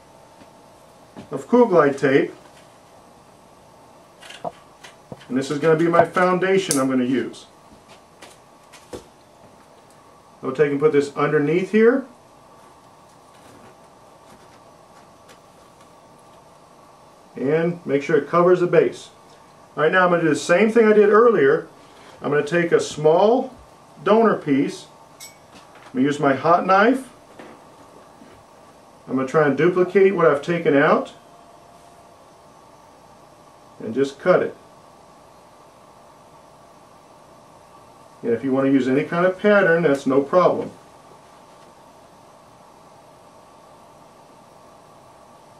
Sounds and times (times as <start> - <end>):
Speech: 1.3 - 2.4, 5.3 - 7.6, 10.4 - 12.2, 17.4 - 19.2, 19.8 - 25.0, 25.9 - 27.2, 29.1 - 31.2, 33.8 - 34.6, 38.2 - 40.8.